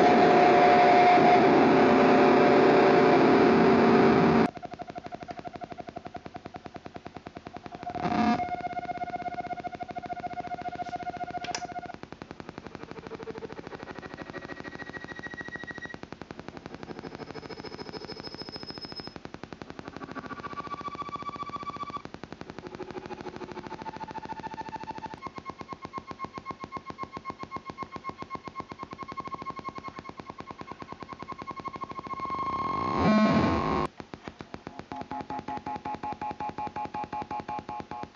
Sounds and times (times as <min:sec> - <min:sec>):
Effects unit: 0:00.0 - 0:38.1.